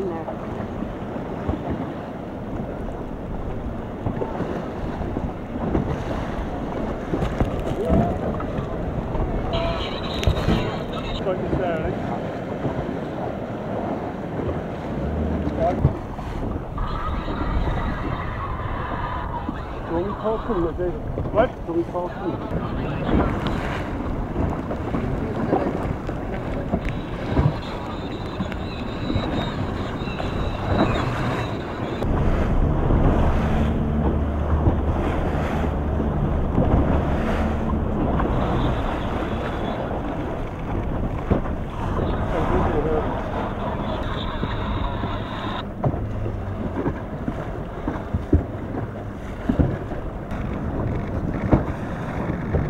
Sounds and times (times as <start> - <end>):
Waves, surf: 0.0 - 52.6.